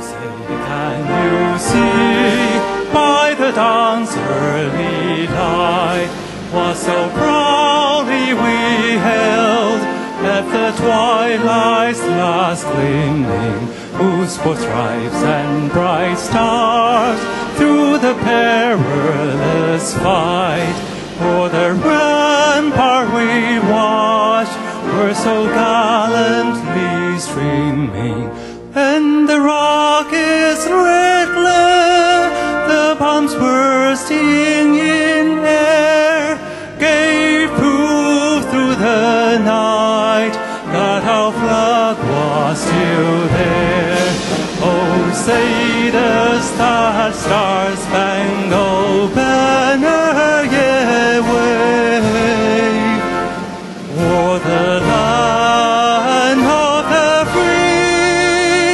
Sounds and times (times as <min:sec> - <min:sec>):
Male singing: 0:00.0 - 0:53.3, 0:53.9 - 0:58.7
Music: 0:00.0 - 0:58.7.